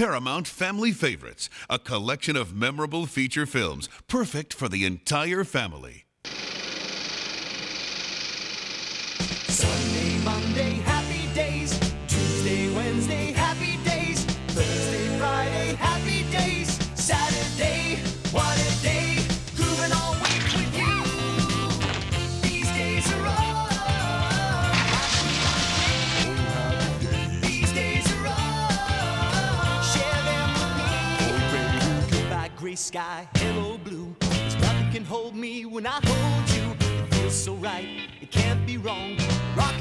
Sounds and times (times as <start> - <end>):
Music: 9.5 - 39.8.